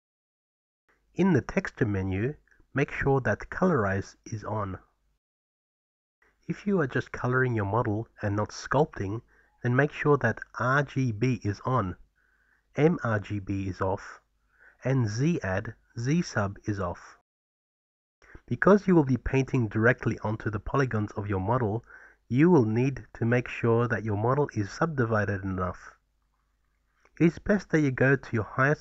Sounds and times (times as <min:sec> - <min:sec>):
Speech: 0:01.2 - 0:04.9, 0:06.5 - 0:12.0, 0:12.8 - 0:14.2, 0:14.8 - 0:17.2, 0:18.3 - 0:26.0, 0:27.2 - 0:28.8.